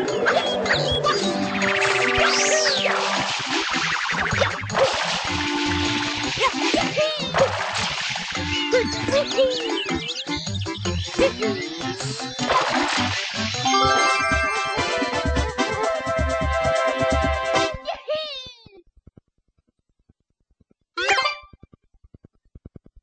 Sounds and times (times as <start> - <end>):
Music: 0.0 - 18.0.